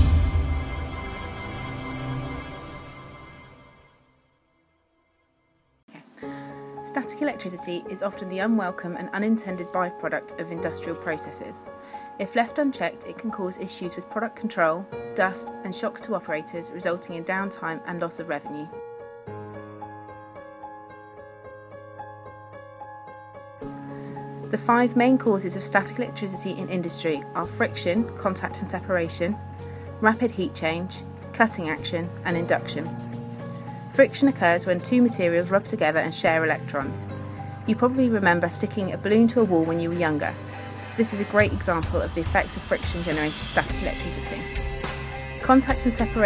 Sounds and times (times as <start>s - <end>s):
Music: 0.0s - 46.2s
Speech: 6.9s - 11.6s, 12.2s - 18.7s, 24.6s - 29.4s, 30.0s - 32.9s, 34.0s - 37.0s, 37.7s - 40.4s, 41.0s - 44.5s, 45.4s - 46.2s.